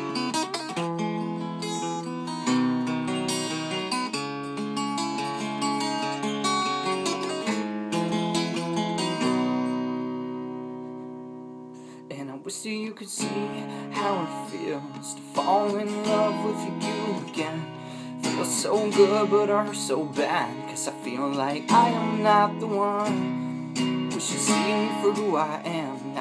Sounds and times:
Strum: 0.0 - 26.2.

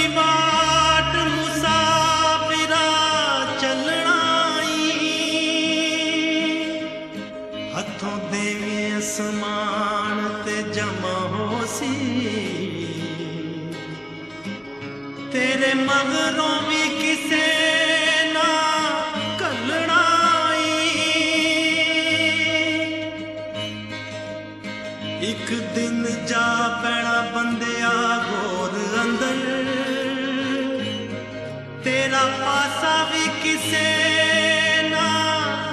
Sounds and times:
Music: 0.0 - 35.7.

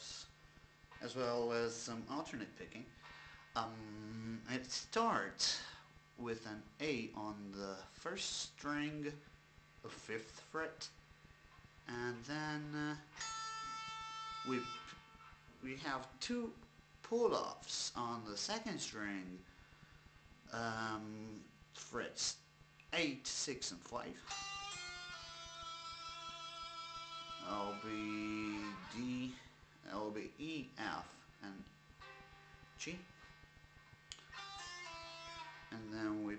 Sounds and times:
Speech: 0.0 - 0.4, 1.0 - 2.9, 3.6 - 9.2, 9.8 - 11.0, 11.9 - 13.2, 14.4 - 14.9, 15.6 - 19.5, 20.5 - 24.3, 27.4 - 31.7, 32.8 - 33.1, 35.7 - 36.3
Guitar: 0.0 - 8.0, 9.1 - 21.9, 22.5 - 36.3.

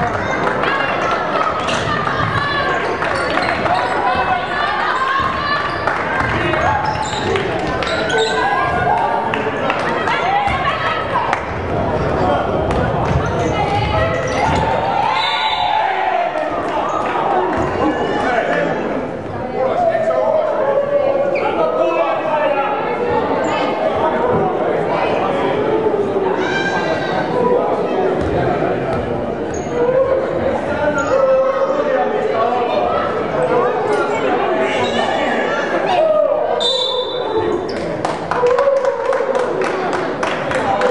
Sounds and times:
Inside, public space: 0.0 - 40.9
Speech: 0.0 - 40.9.

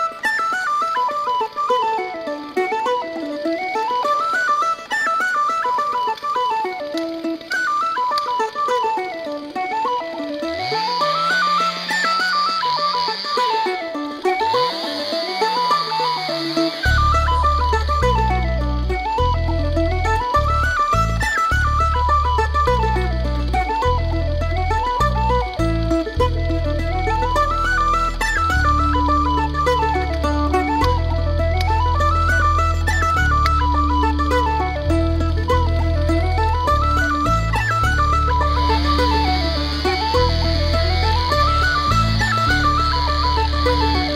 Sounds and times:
Music: 0.0 - 44.1.

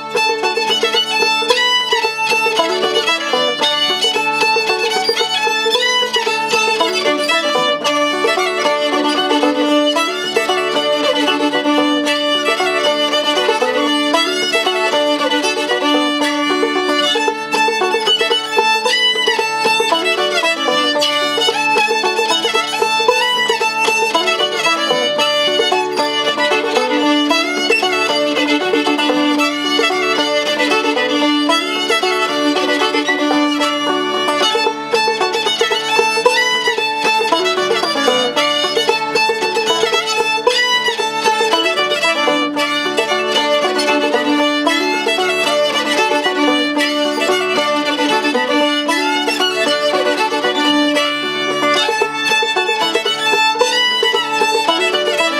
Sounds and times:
Violin, fiddle: 0.0 - 55.3.

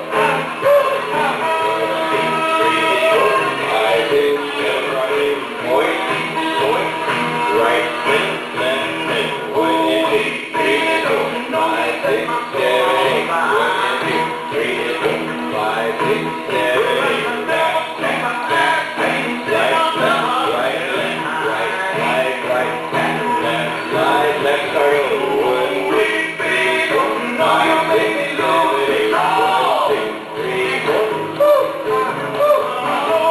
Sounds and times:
Music: 0.0 - 33.3.

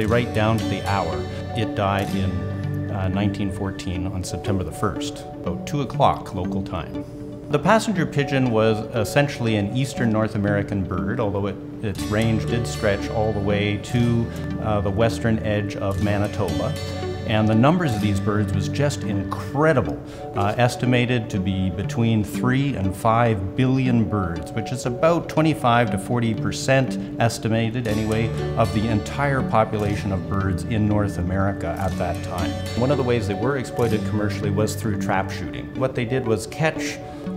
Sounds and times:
Speech: 0.0 - 37.0
Music: 0.0 - 37.3.

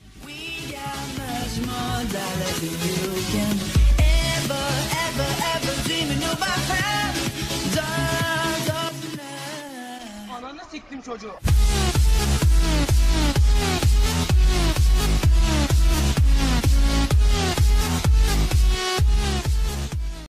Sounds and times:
Dubstep: 0.0 - 20.2
Speech: 10.2 - 11.4.

